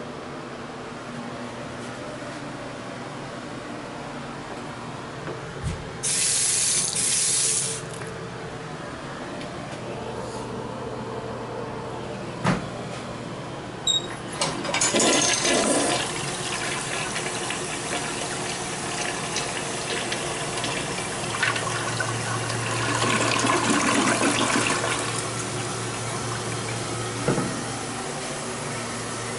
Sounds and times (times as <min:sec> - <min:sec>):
Toilet flush: 0:06.0 - 0:07.8, 0:14.3 - 0:28.0
Water: 0:15.5 - 0:27.5.